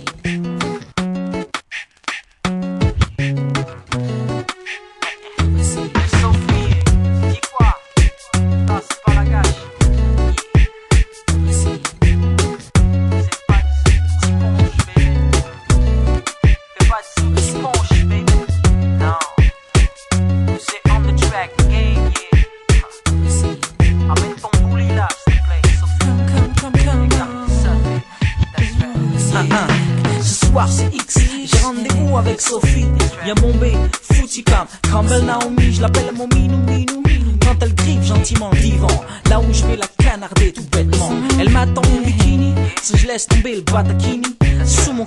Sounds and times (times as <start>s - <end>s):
Music: 0.0s - 45.0s.